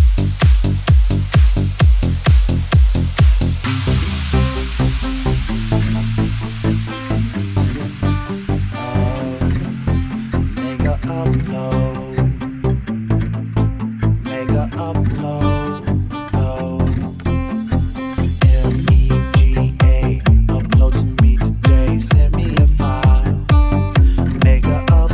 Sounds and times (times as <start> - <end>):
White noise: 0.0 - 11.9
Music: 0.0 - 25.1.